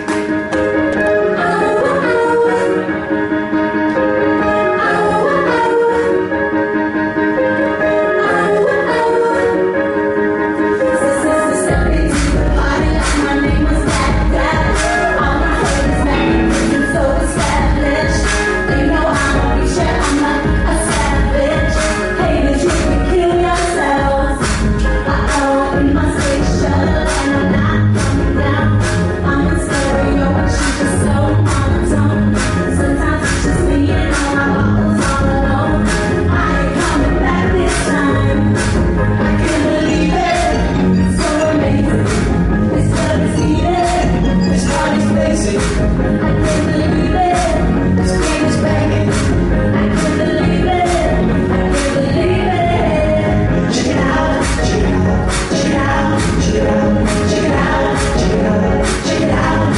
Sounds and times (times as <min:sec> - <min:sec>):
Rhythm and blues: 0:00.0 - 0:59.7.